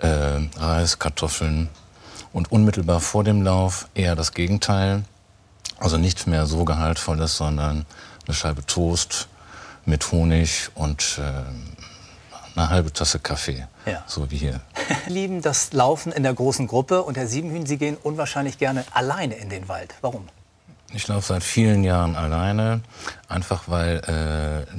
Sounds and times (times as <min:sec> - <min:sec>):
Speech: 0:00.0 - 0:01.7, 0:02.4 - 0:05.1, 0:05.7 - 0:09.3, 0:12.6 - 0:24.7.